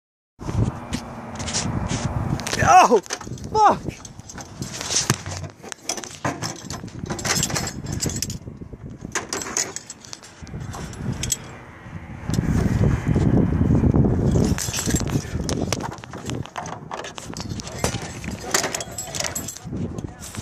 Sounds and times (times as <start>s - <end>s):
Outside, rural or natural: 0.4s - 20.4s
Speech: 2.6s - 3.8s, 17.8s - 20.4s.